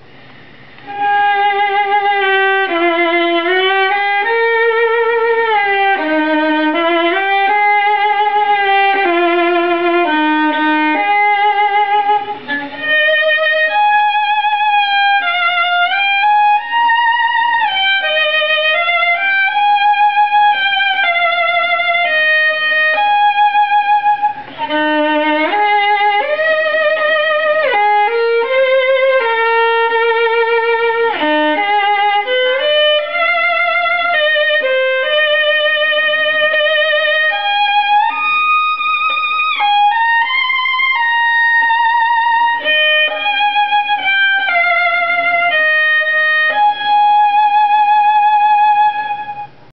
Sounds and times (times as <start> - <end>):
Violin, fiddle: 0.8 - 49.7.